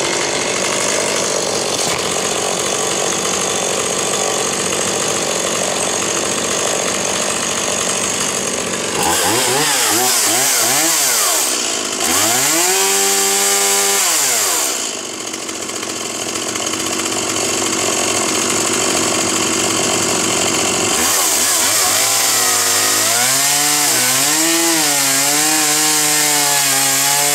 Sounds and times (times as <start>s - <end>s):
Chainsaw: 0.0s - 27.3s.